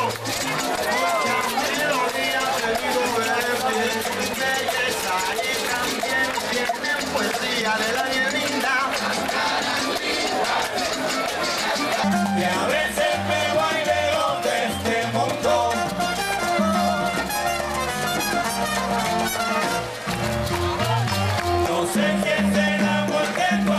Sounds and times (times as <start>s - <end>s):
Music: 0.0s - 23.7s.